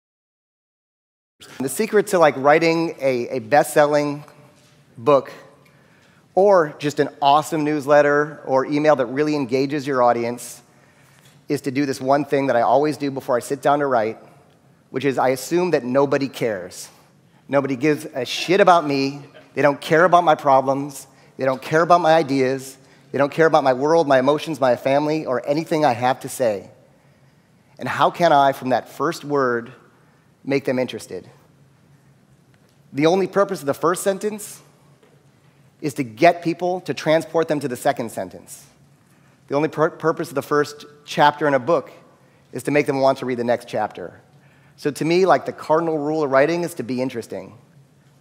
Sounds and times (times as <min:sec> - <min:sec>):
Speech: 0:01.4 - 0:04.4, 0:05.0 - 0:05.6, 0:06.4 - 0:10.7, 0:11.5 - 0:14.3, 0:14.9 - 0:26.8, 0:27.8 - 0:29.9, 0:30.5 - 0:31.4, 0:32.9 - 0:34.7, 0:35.8 - 0:38.8, 0:39.5 - 0:44.2, 0:44.8 - 0:47.6.